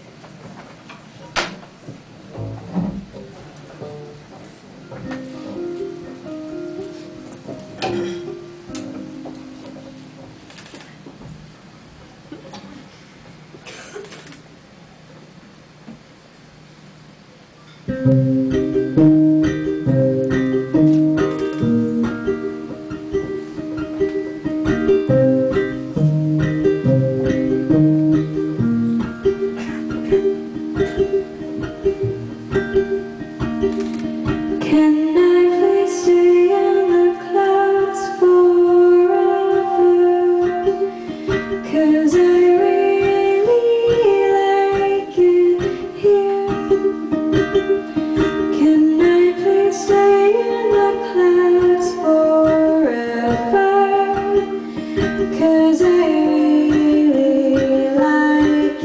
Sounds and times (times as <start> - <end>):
Inside, large room or hall: 0.0 - 16.1, 17.3 - 58.8
Musical instrument: 17.9 - 58.8.